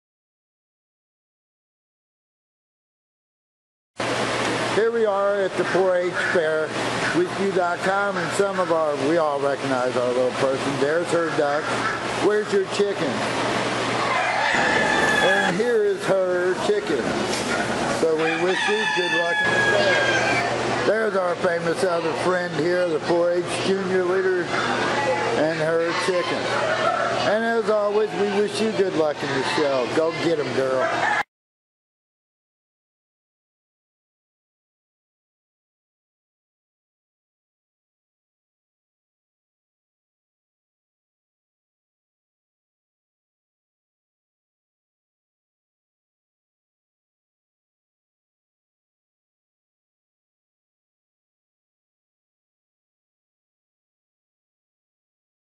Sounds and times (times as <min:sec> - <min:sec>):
Speech: 0:04.8 - 0:13.2, 0:15.2 - 0:17.1, 0:18.0 - 0:20.1, 0:20.8 - 0:26.6, 0:27.2 - 0:30.8.